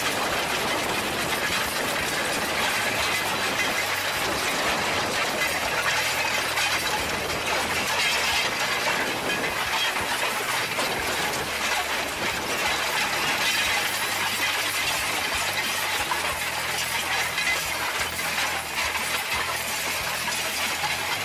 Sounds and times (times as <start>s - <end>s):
Outside, rural or natural: 0.0s - 21.2s
Vehicle: 0.0s - 21.2s.